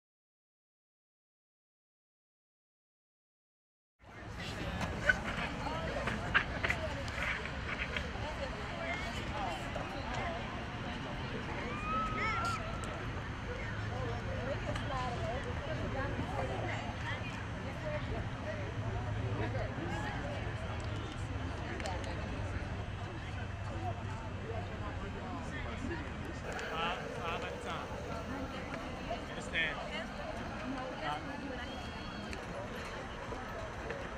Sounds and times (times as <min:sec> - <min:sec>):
Speech: 0:04.0 - 0:34.1.